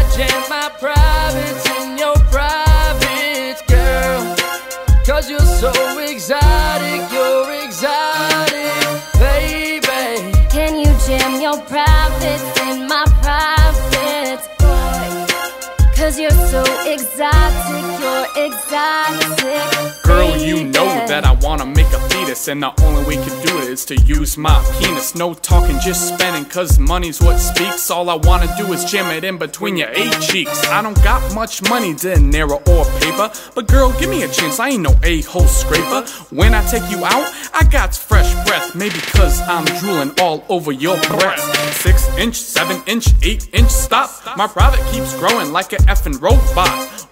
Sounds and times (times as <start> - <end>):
Music: 0.0 - 47.1.